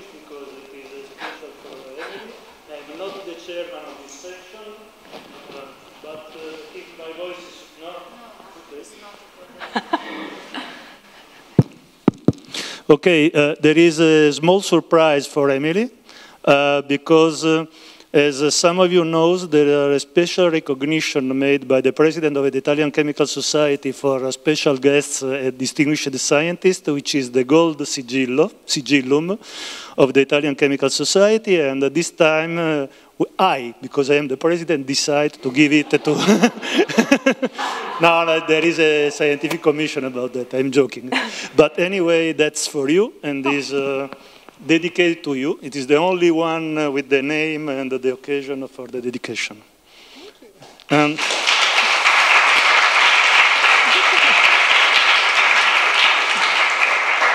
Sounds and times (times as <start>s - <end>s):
Speech: 0.0s - 4.9s, 5.5s - 9.6s, 12.9s - 29.4s, 30.0s - 36.3s, 37.9s - 49.7s, 50.4s - 51.2s.